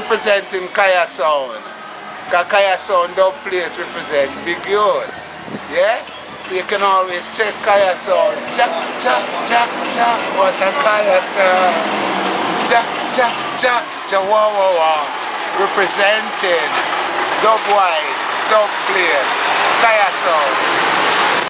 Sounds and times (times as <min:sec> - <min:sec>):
Speech: 0:00.0 - 0:01.6, 0:02.3 - 0:05.1, 0:05.7 - 0:11.8, 0:12.6 - 0:16.8, 0:17.4 - 0:20.6.